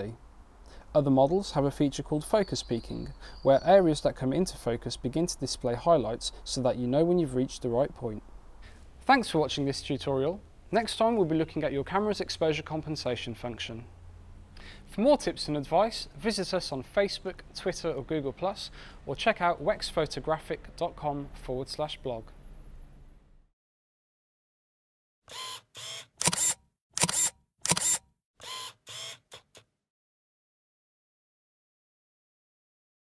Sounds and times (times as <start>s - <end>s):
Speech: 0.0s - 0.2s, 0.9s - 8.2s, 9.0s - 13.9s, 14.9s - 22.4s
Single-lens reflex camera: 25.3s - 29.7s.